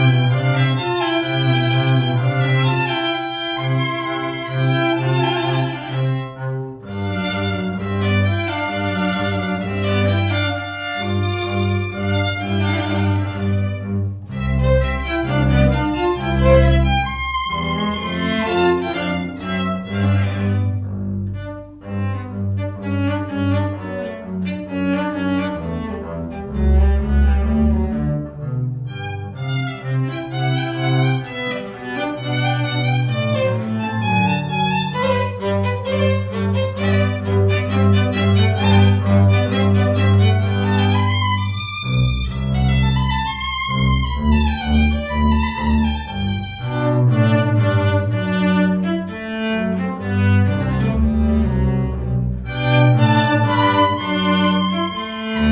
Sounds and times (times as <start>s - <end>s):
Violin, fiddle: 0.0s - 28.1s, 28.8s - 55.5s
Cello: 0.0s - 55.5s.